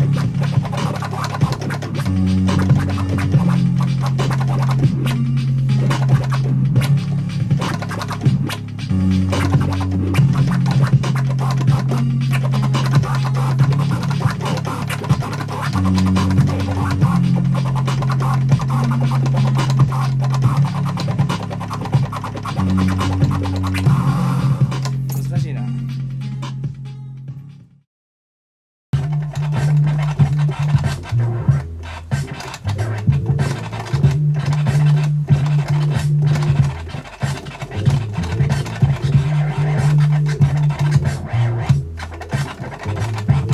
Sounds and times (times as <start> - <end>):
Scratching (performance technique): 0.0 - 27.5, 29.0 - 43.5
Electronic music: 0.0 - 27.6, 29.0 - 43.5.